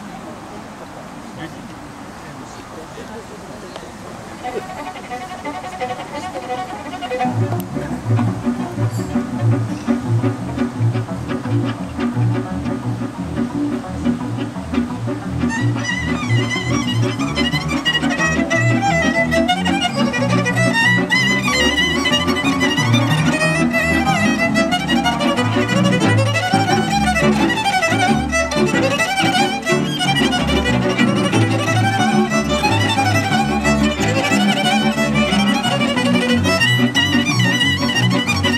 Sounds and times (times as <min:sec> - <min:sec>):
Independent music: 0:04.4 - 0:38.5.